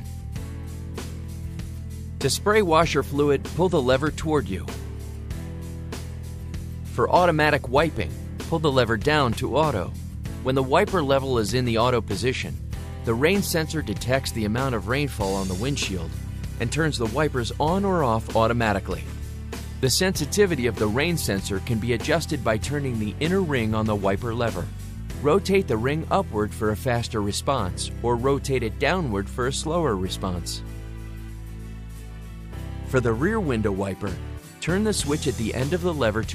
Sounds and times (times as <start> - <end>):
Music: 0.0 - 36.3
Speech: 2.2 - 4.8, 7.0 - 19.1, 19.8 - 30.6, 32.9 - 36.3.